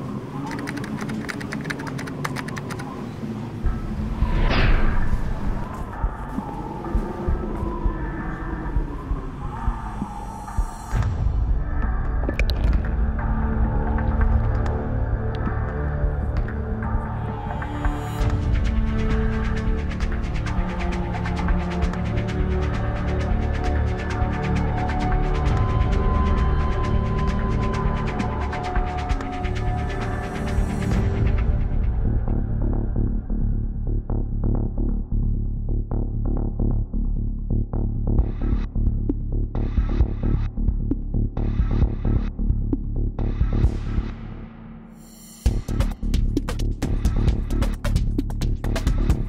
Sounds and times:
Music: 0:03.6 - 0:49.2.

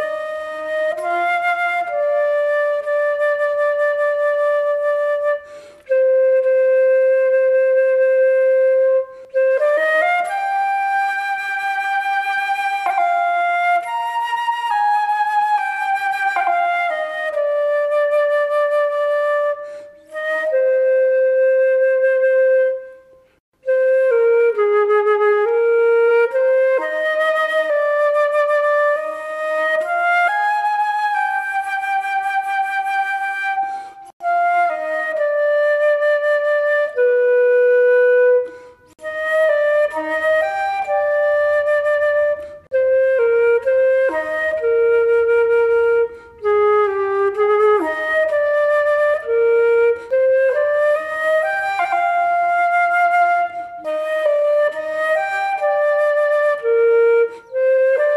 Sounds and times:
Flute: 0:00.0 - 0:58.1.

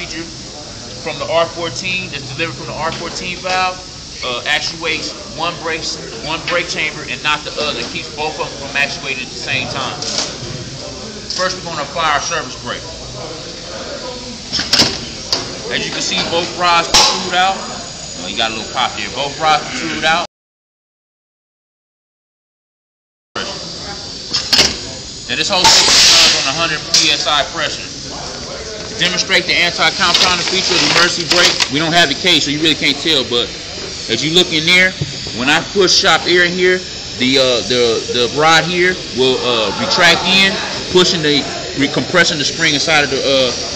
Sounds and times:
Speech: 0:00.0 - 0:14.5, 0:15.2 - 0:20.3, 0:24.8 - 0:43.7.

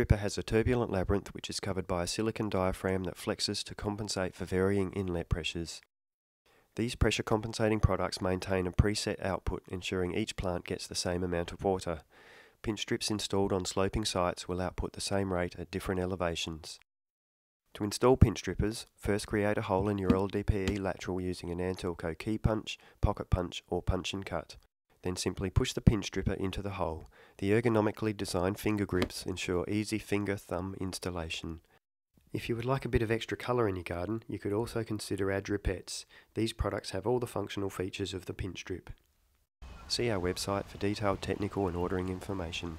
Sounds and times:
Speech: 0:00.0 - 0:05.9, 0:06.8 - 0:16.8, 0:17.7 - 0:31.7, 0:32.3 - 0:39.0, 0:39.9 - 0:42.7.

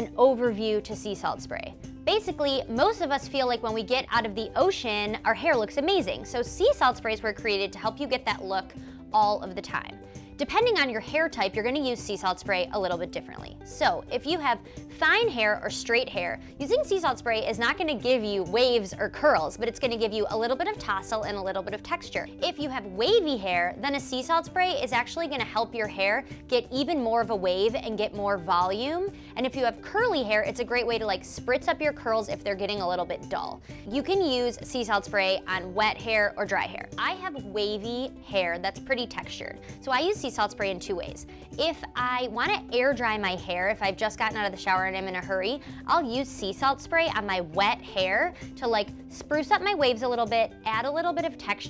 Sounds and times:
Music: 0:00.0 - 0:51.6
Speech: 0:00.0 - 0:51.6.

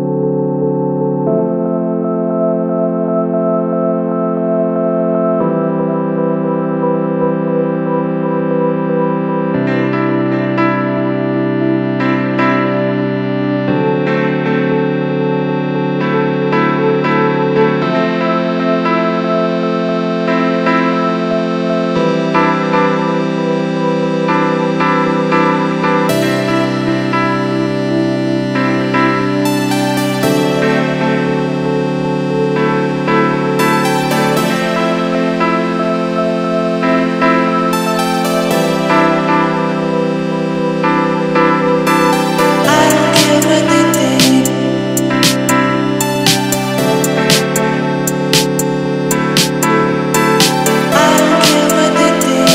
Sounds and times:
Chorus effect: 0:00.0 - 0:52.5
Music: 0:00.0 - 0:52.5.

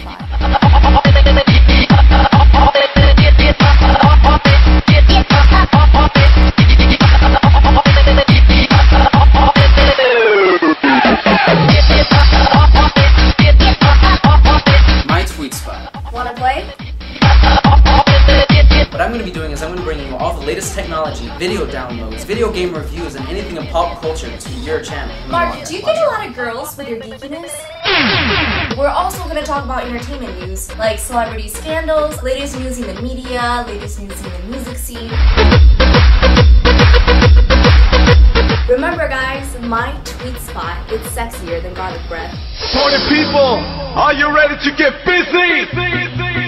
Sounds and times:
Music: 0:00.0 - 0:46.4
Speech: 0:15.1 - 0:16.7, 0:19.0 - 0:27.7, 0:28.8 - 0:35.1, 0:38.7 - 0:44.6.

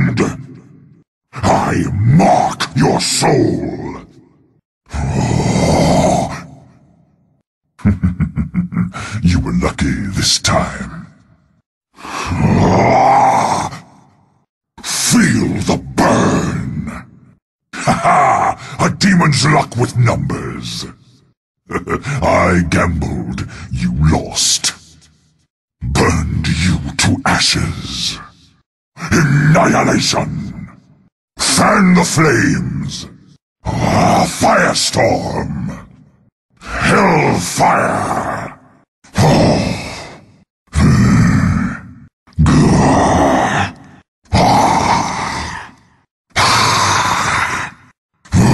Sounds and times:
Speech: 0:00.0 - 0:00.7, 0:01.3 - 0:04.2, 0:04.9 - 0:06.9, 0:07.8 - 0:11.4, 0:12.0 - 0:14.0, 0:14.8 - 0:17.2, 0:17.8 - 0:25.2, 0:25.8 - 0:36.0, 0:36.6 - 0:40.2, 0:40.8 - 0:45.8, 0:46.4 - 0:48.5.

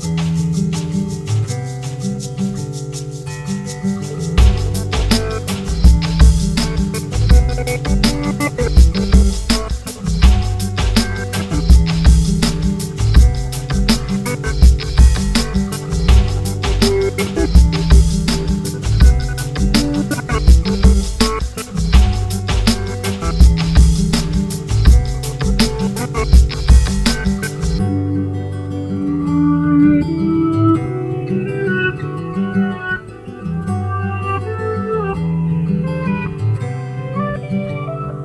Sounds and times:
Music: 0:00.0 - 0:38.2.

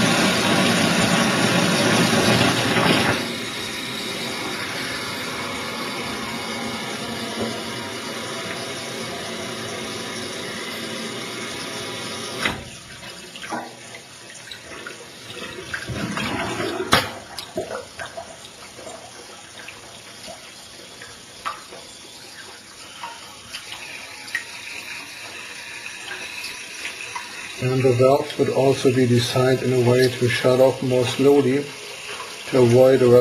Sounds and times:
Sink (filling or washing): 0:00.0 - 0:33.2
Water: 0:00.0 - 0:33.2
Water tap, faucet: 0:00.0 - 0:33.2.

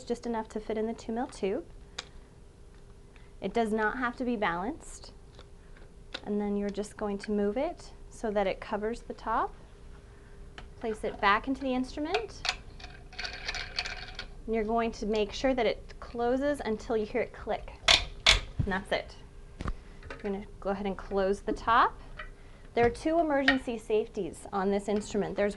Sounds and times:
Speech: 0:00.0 - 0:01.7, 0:03.4 - 0:05.2, 0:06.2 - 0:09.6, 0:10.8 - 0:12.4, 0:14.5 - 0:17.8, 0:18.6 - 0:19.2, 0:20.2 - 0:22.0, 0:22.8 - 0:25.5
Inside, small room: 0:00.0 - 0:25.5.

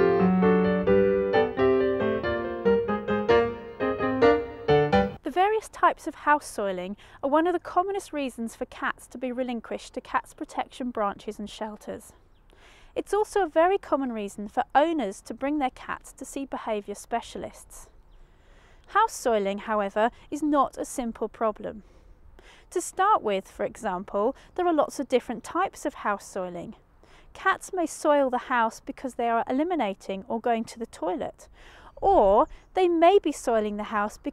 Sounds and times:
Speech: 0:05.2 - 0:12.2, 0:13.0 - 0:17.9, 0:18.9 - 0:21.8, 0:22.7 - 0:26.8, 0:27.4 - 0:34.3.

